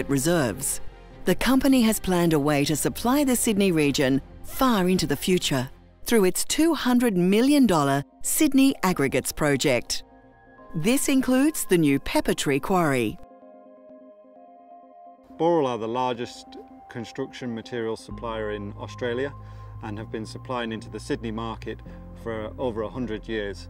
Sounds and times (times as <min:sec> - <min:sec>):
Music: 0:00.0 - 0:23.6
Speech: 0:10.8 - 0:13.2, 0:15.4 - 0:23.6.